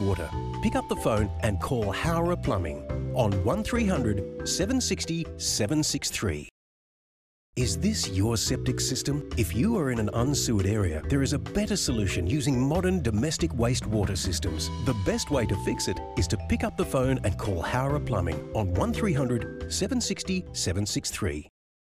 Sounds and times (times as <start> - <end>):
Music: 0.0 - 6.5, 7.6 - 21.5
Speech: 0.0 - 6.5, 7.6 - 21.5.